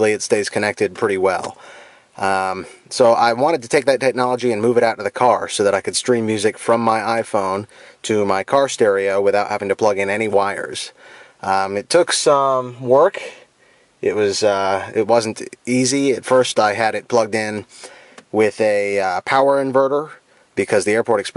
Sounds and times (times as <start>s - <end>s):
Speech: 0.0s - 1.6s, 2.2s - 17.7s, 18.3s - 21.3s.